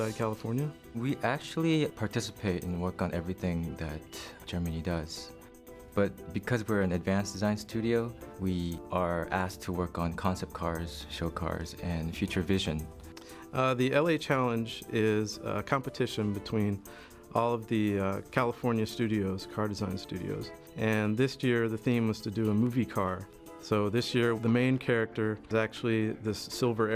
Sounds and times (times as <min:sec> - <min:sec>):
Speech: 0:00.0 - 0:05.4, 0:06.0 - 0:12.9, 0:13.5 - 0:26.9
Music: 0:00.0 - 0:26.9.